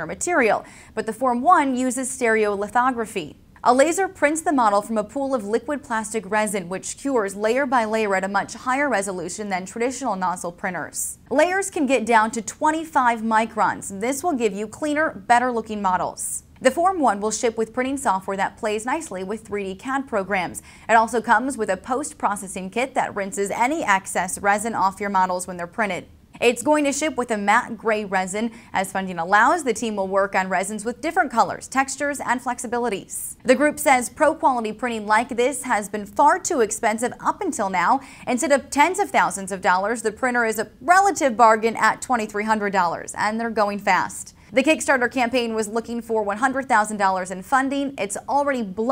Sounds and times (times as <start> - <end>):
Speech: 0.0 - 48.9.